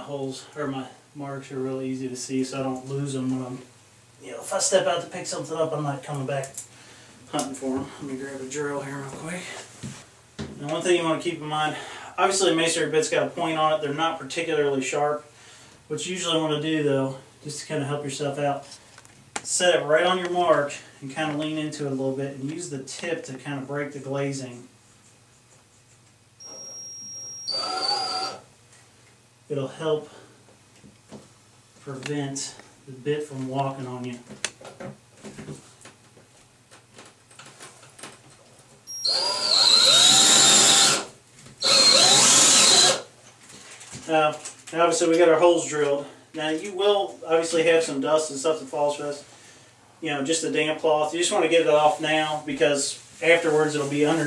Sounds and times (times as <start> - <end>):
Speech: 0.0 - 6.6, 7.3 - 9.7, 10.6 - 15.3, 15.9 - 18.8, 19.5 - 24.7, 29.5 - 30.2, 31.8 - 34.3, 44.0 - 49.3, 50.0 - 54.2
Drill: 26.4 - 28.4, 38.9 - 43.1.